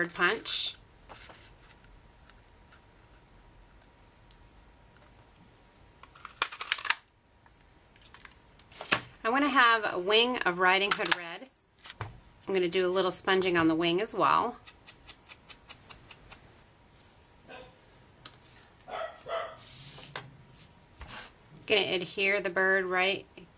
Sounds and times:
Bark: 17.5s - 17.8s, 18.9s - 19.6s.

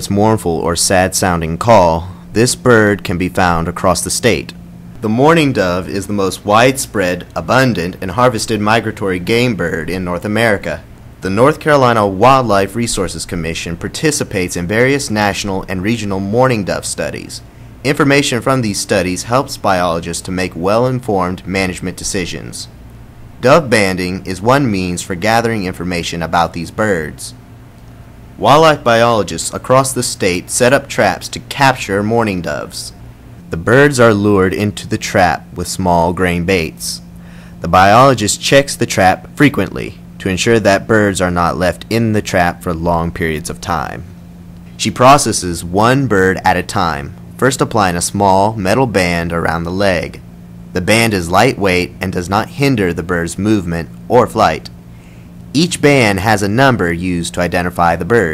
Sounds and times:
Speech: 0.0s - 22.8s, 23.4s - 27.4s, 28.4s - 44.1s, 44.8s - 50.2s, 50.8s - 54.8s, 55.5s - 58.3s.

